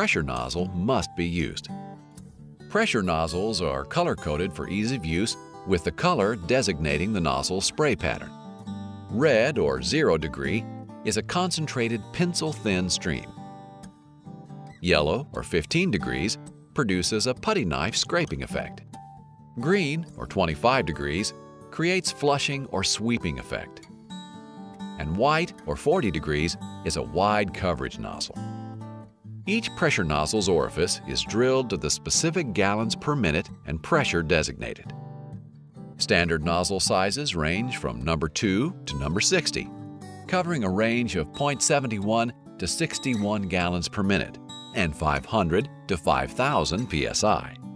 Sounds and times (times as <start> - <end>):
Speech: 0.0 - 1.7, 2.8 - 8.3, 9.1 - 13.3, 14.8 - 18.8, 19.6 - 23.8, 25.0 - 28.4, 29.5 - 34.9, 36.0 - 39.7, 40.3 - 47.6
Music: 0.0 - 47.7.